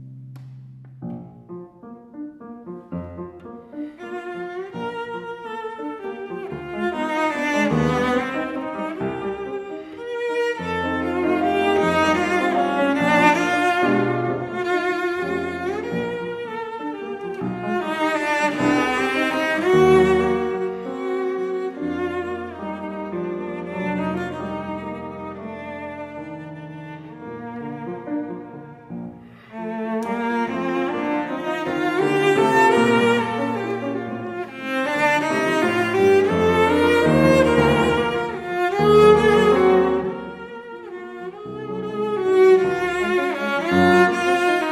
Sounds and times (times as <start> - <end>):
Cello: 0.0 - 44.7.